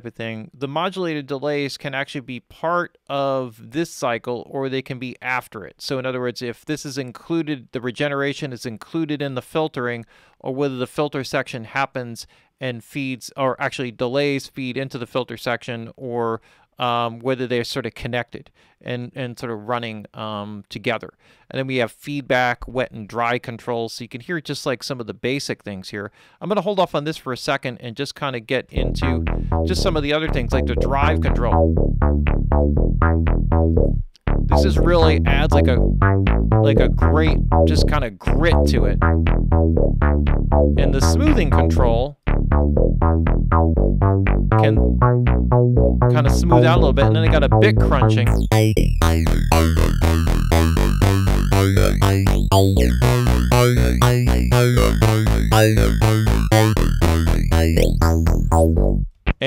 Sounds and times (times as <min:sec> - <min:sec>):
Speech: 0:00.0 - 0:31.6, 0:34.5 - 0:35.9, 0:36.6 - 0:39.0, 0:40.8 - 0:42.2, 0:44.6 - 0:44.8, 0:46.1 - 0:48.4
Music: 0:28.8 - 0:59.4.